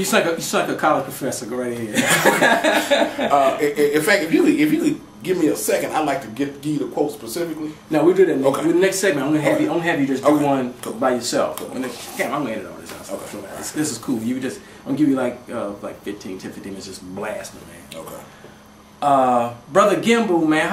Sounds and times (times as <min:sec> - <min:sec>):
Male speech, man speaking: 0:00.0 - 0:02.1, 0:03.3 - 0:18.3, 0:19.0 - 0:20.7
Inside, small room: 0:00.0 - 0:20.7.